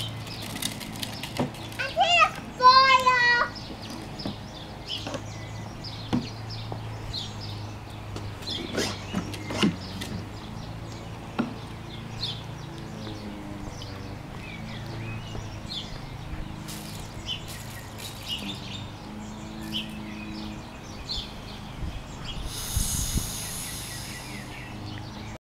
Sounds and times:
Spray: 16.6s - 18.3s, 22.4s - 24.8s.

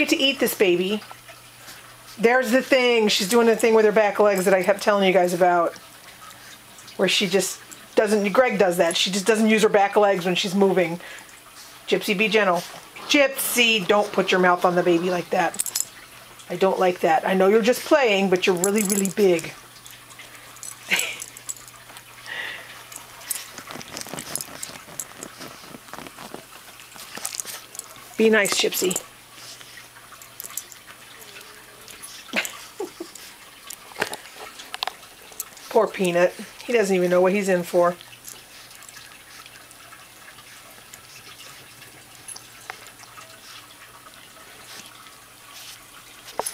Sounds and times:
Speech: 0.0s - 1.0s, 2.2s - 5.8s, 7.0s - 11.0s, 11.9s - 15.6s, 16.5s - 19.6s, 28.2s - 29.0s, 35.7s - 38.0s
Sink (filling or washing): 0.0s - 46.5s.

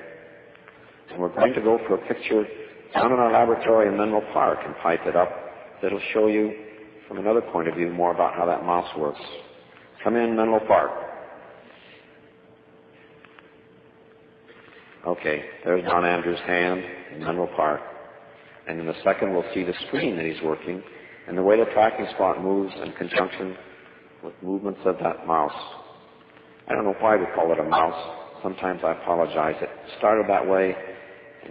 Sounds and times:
Speech: 1.1s - 11.1s, 15.0s - 17.9s, 18.6s - 26.0s, 26.7s - 31.5s.

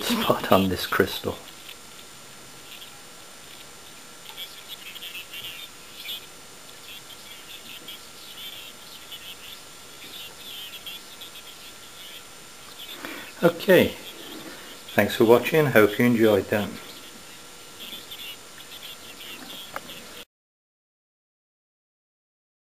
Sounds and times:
Speech: 0.0s - 1.5s, 13.4s - 14.0s, 15.0s - 16.8s
Radio: 0.0s - 20.2s.

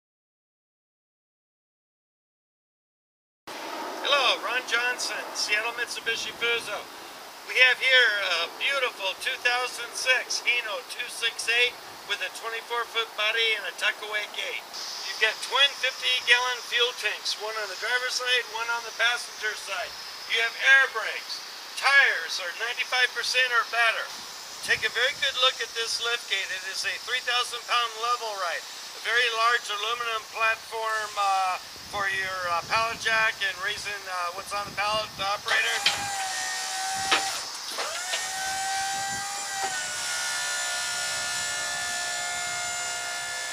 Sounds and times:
Speech: 4.1s - 6.9s, 7.5s - 36.0s.

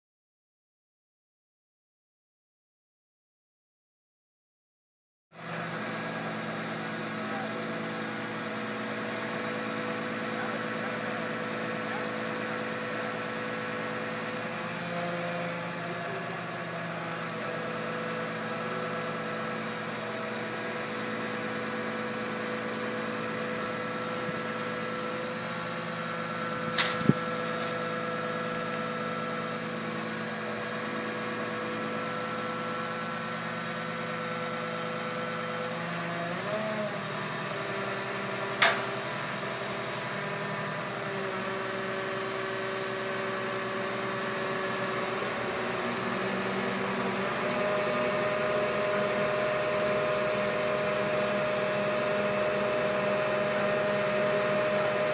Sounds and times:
Vehicle: 5.4s - 55.1s.

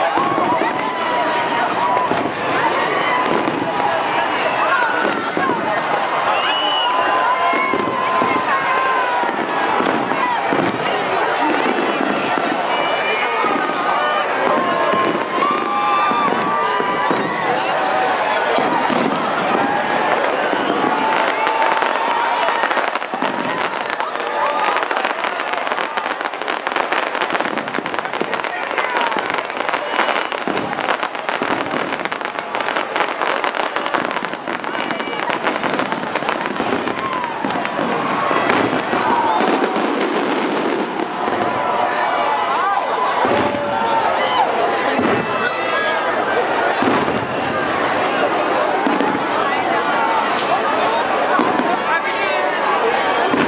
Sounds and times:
Speech: 0.0s - 39.8s, 41.2s - 53.4s.

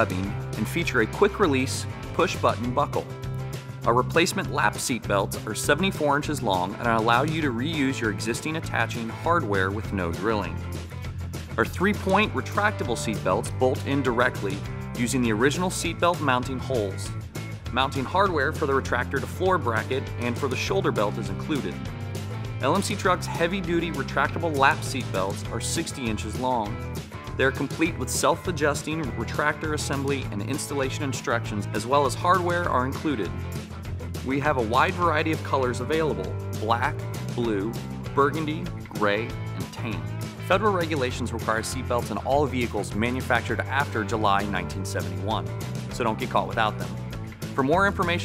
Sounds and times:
Speech: 0.0s - 3.1s, 3.8s - 10.7s, 11.6s - 21.9s, 22.6s - 26.8s, 27.4s - 33.4s, 34.2s - 47.0s, 47.6s - 48.2s
Music: 0.0s - 48.2s.

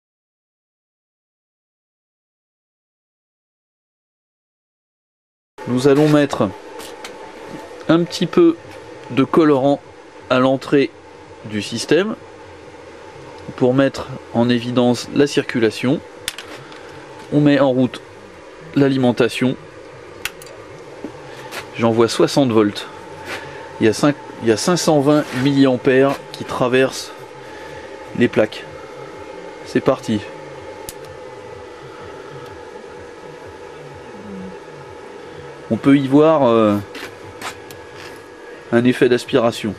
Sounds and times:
Speech: 5.7s - 6.6s, 7.8s - 12.2s, 13.4s - 16.0s, 17.3s - 18.0s, 18.7s - 19.6s, 21.8s - 23.0s, 23.8s - 27.2s, 28.2s - 28.7s, 29.7s - 30.4s, 33.8s - 34.6s, 35.7s - 36.9s, 38.7s - 39.7s.

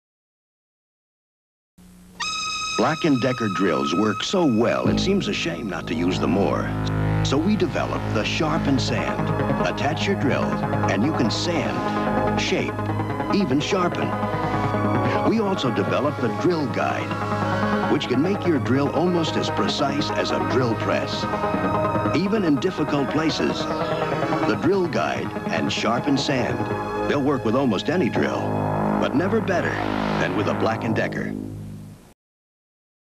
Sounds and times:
Music: 1.8s - 32.1s
Speech: 2.8s - 14.1s, 15.0s - 17.2s, 17.8s - 21.3s, 22.1s - 31.4s.

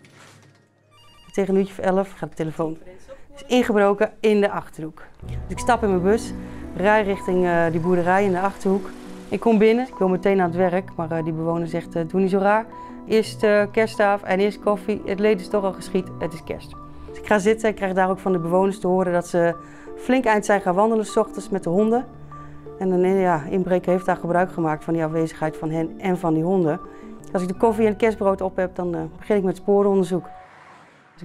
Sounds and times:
Music: 0.0s - 31.2s
Speech: 1.4s - 22.1s, 22.8s - 30.3s.

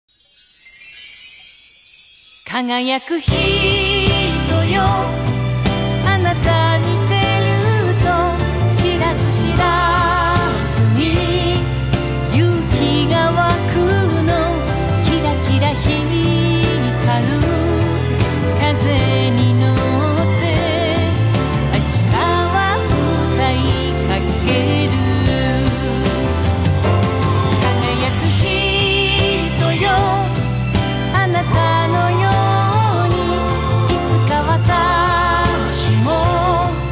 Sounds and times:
Music: 0.0s - 36.9s.

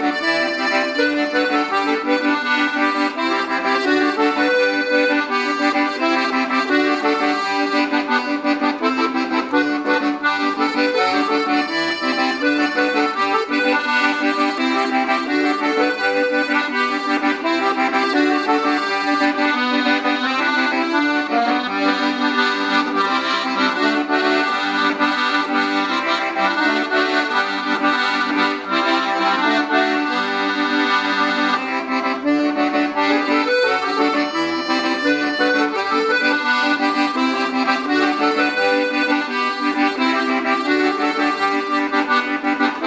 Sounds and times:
Accordion: 0.0s - 42.8s.

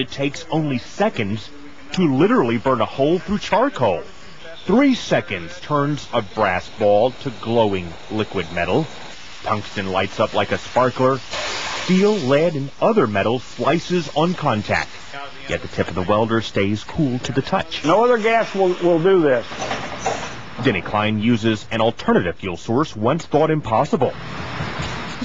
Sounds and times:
Speech: 0.0s - 11.2s, 11.9s - 19.5s, 20.6s - 24.2s.

